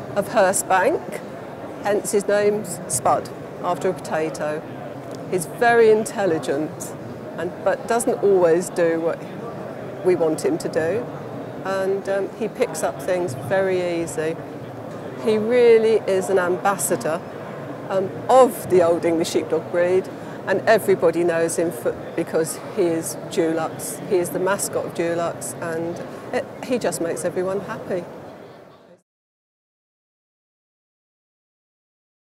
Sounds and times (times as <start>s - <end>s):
Speech: 0.2s - 1.2s, 1.8s - 4.7s, 5.3s - 14.4s, 15.2s - 17.2s, 17.9s - 28.1s.